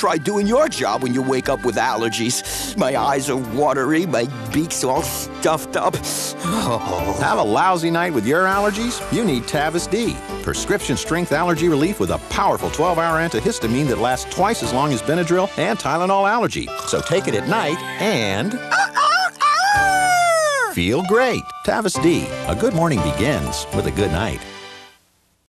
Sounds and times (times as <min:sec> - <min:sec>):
Speech: 0:00.0 - 0:18.6, 0:20.8 - 0:24.4
Music: 0:00.0 - 0:25.0.